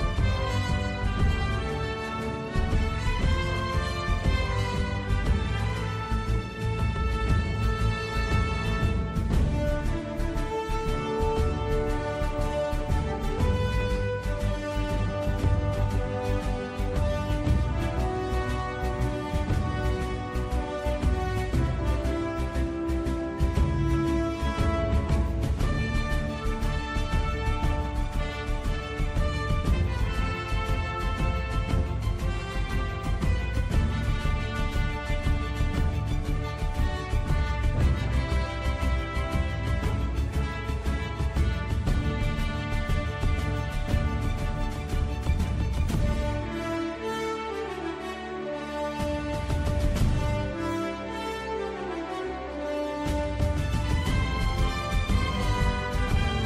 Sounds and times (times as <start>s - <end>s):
Music: 0.0s - 56.4s.